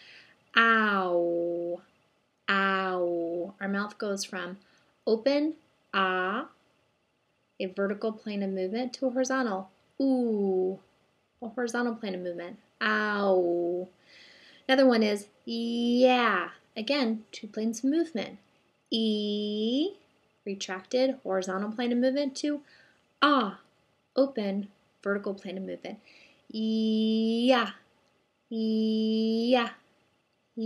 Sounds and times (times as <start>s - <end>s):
Narration, monologue: 0.0s - 30.6s
Female speech, woman speaking: 0.6s - 1.8s, 2.5s - 6.5s, 7.6s - 10.8s, 11.4s - 13.9s, 14.7s - 18.4s, 19.0s - 22.6s, 23.2s - 23.6s, 24.2s - 27.8s, 28.6s - 29.8s.